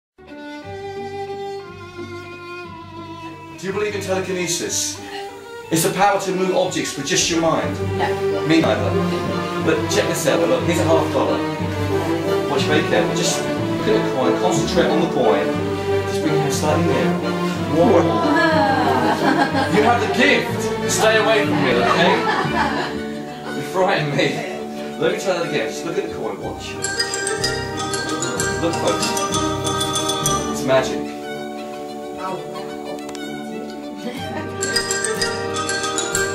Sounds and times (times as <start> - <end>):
Orchestra: 0.2 - 36.3.